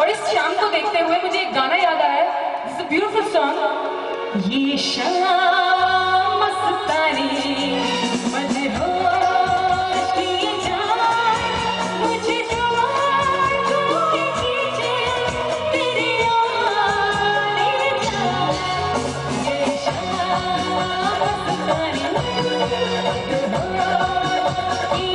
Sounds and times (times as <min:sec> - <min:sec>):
Female singing: 0:00.0 - 0:25.1
Music: 0:00.0 - 0:25.1.